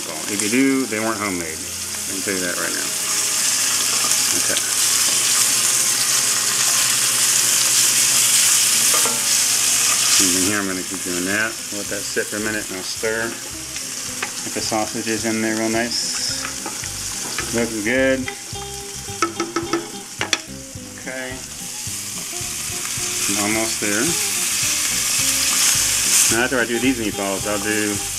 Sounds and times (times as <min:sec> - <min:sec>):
Speech: 0:00.0 - 0:02.9, 0:10.2 - 0:13.4, 0:14.5 - 0:16.4, 0:17.5 - 0:18.3, 0:21.0 - 0:21.4, 0:23.3 - 0:24.2, 0:26.3 - 0:28.1.